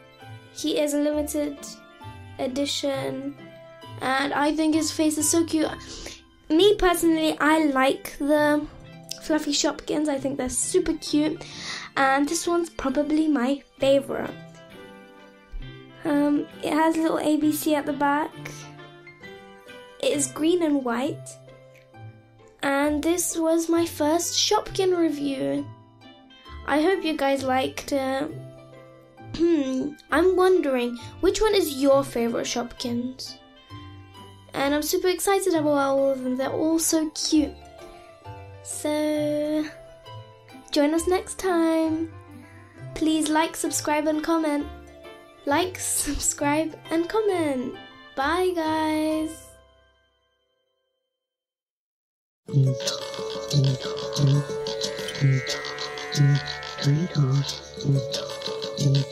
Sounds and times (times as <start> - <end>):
Music: 0.0 - 51.2, 52.5 - 59.1
Speech: 0.6 - 1.8, 2.4 - 3.3, 4.0 - 5.8, 6.5 - 11.4, 12.0 - 14.3, 16.0 - 18.6, 20.0 - 21.4, 22.6 - 25.6, 26.7 - 28.3, 29.4 - 33.4, 34.6 - 37.6, 38.7 - 39.8, 40.7 - 42.1, 43.0 - 44.6, 45.5 - 49.5, 53.5 - 54.5, 56.2 - 59.1.